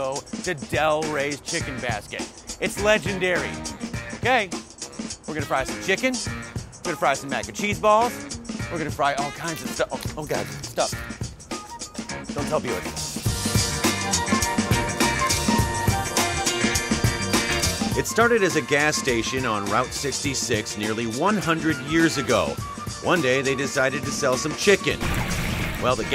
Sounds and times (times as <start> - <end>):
Speech: 0.0 - 4.6, 5.3 - 6.3, 6.9 - 11.0, 12.3 - 13.0, 18.0 - 25.0, 25.8 - 26.1
Music: 0.0 - 26.1.